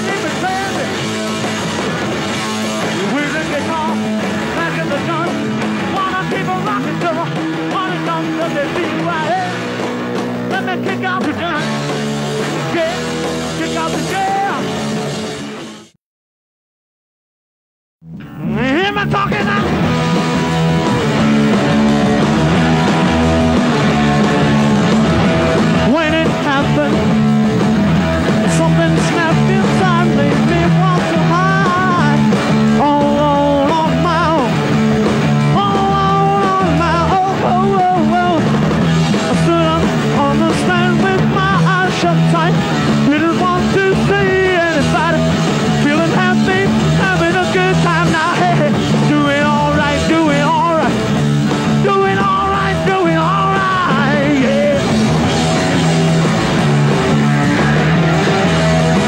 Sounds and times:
Ska: 0.0 - 16.0, 18.2 - 59.0.

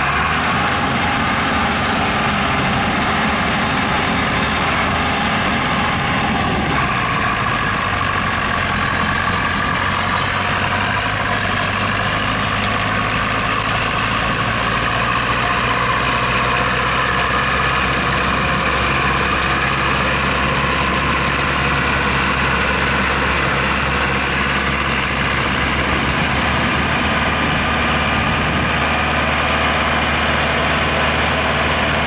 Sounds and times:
Clatter: 5.7 - 32.0.

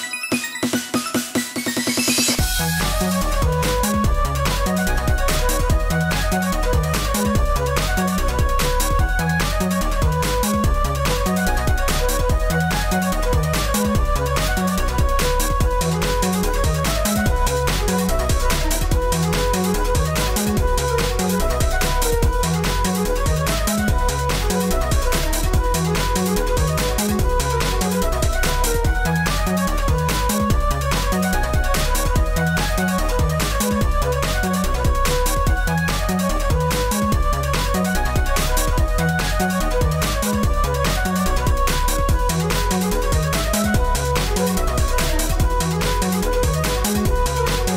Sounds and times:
Music: 0.0 - 47.7.

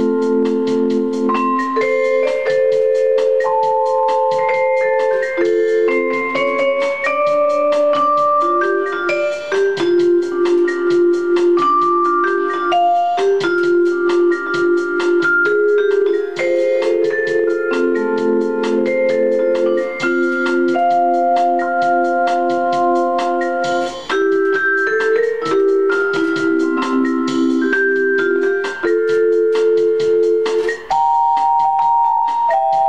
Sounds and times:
Glockenspiel: 0.0 - 32.8
Marimba, xylophone: 0.0 - 32.8.

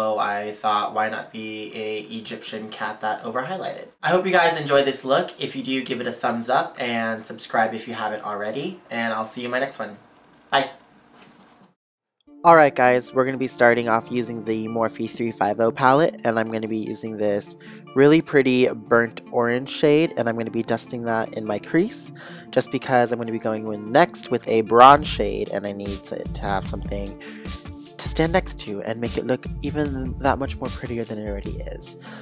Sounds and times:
Music: 0.0 - 9.8, 12.2 - 32.2
Speech: 0.0 - 10.0, 10.6 - 10.8, 12.5 - 27.2, 28.0 - 32.0.

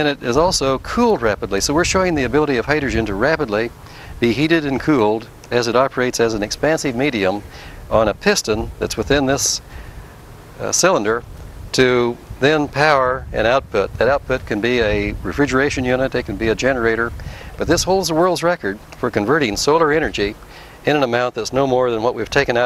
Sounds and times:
Speech: 0.0 - 9.7, 10.6 - 22.6.

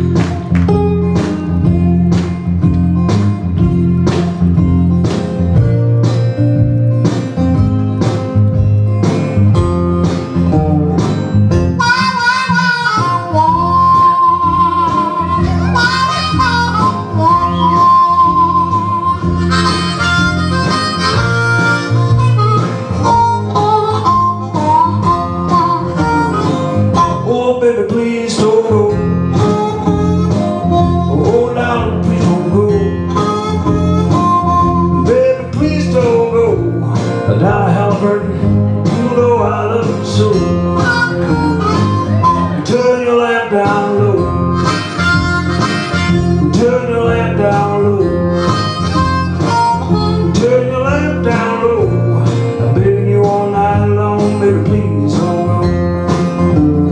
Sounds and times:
Harmonica: 10.5 - 27.6, 28.9 - 37.0, 40.1 - 52.2.

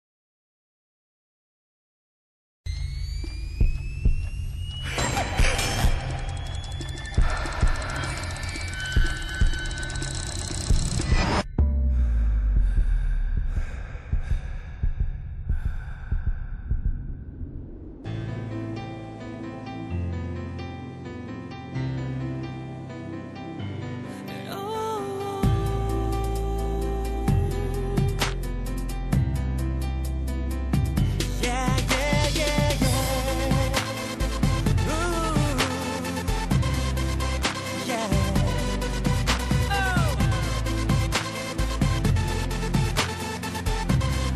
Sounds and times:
Music: 2.7 - 13.7, 18.0 - 44.3.

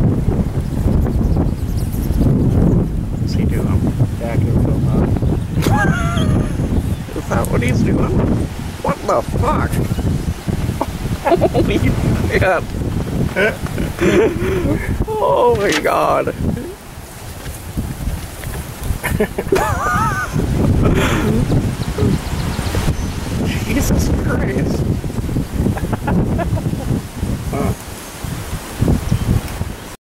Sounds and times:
Speech: 3.3 - 5.1, 7.1 - 8.2, 8.8 - 9.9, 11.3 - 12.7, 13.4 - 16.8, 23.5 - 24.8, 27.5 - 27.8.

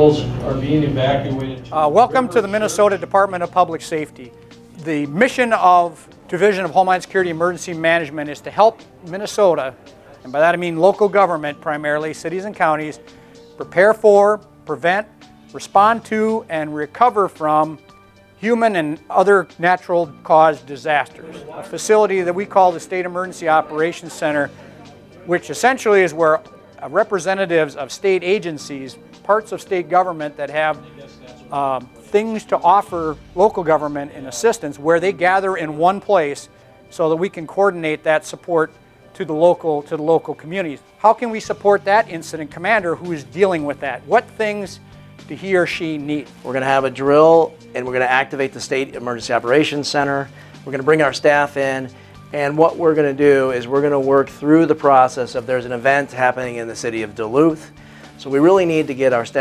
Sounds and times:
Speech: 0.0 - 13.0, 13.6 - 17.8, 18.4 - 24.6, 25.2 - 59.4
Music: 0.0 - 59.4.

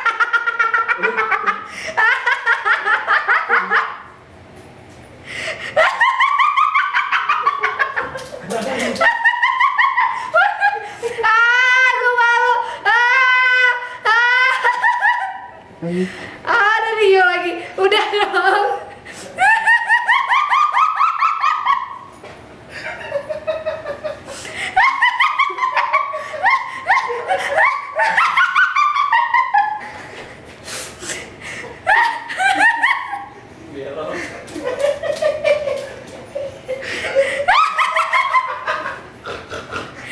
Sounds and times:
Laughter: 0.0 - 4.1, 5.5 - 11.6, 12.9 - 15.6, 17.9 - 30.5, 31.4 - 40.1.

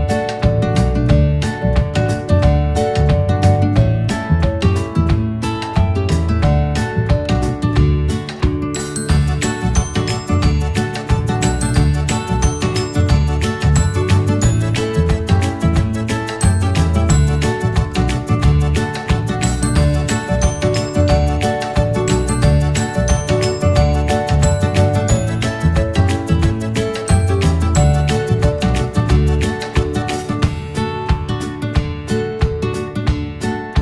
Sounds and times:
Music: 0.0 - 33.8.

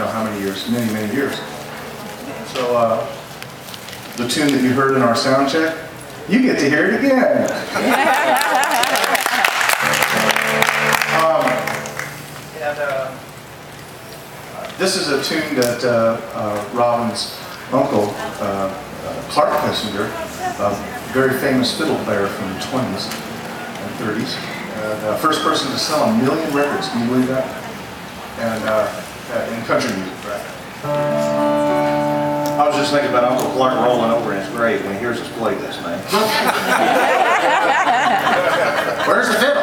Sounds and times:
Speech: 0.0 - 1.6, 14.6 - 23.2, 23.8 - 27.6, 28.4 - 30.6, 32.6 - 36.5, 38.4 - 39.6
Music: 9.9 - 12.3, 30.8 - 36.1.

